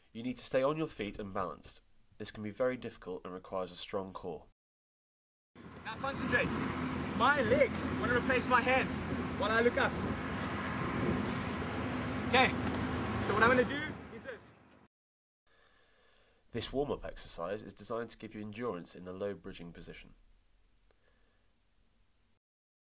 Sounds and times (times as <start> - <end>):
Speech: 0.2 - 4.5, 5.9 - 6.5, 7.2 - 10.0, 12.3 - 12.6, 13.3 - 14.5, 16.5 - 20.2.